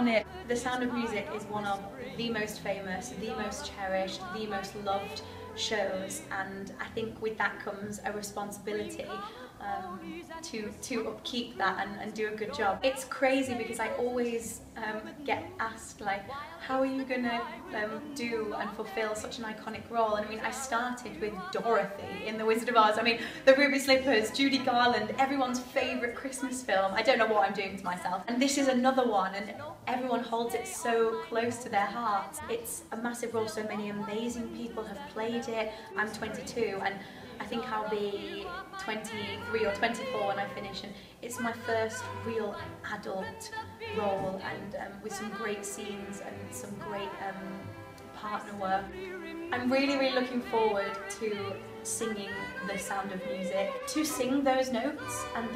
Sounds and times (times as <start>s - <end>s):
Speech: 0.0s - 47.6s, 48.2s - 49.0s, 49.6s - 55.5s
Music: 0.0s - 55.5s.